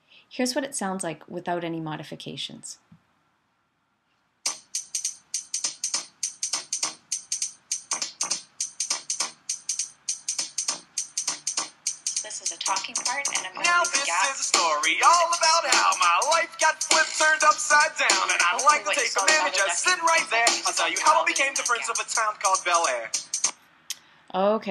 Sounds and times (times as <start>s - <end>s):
Speech: 0.3s - 2.8s, 12.3s - 13.8s, 24.3s - 24.7s
Music: 4.5s - 23.5s.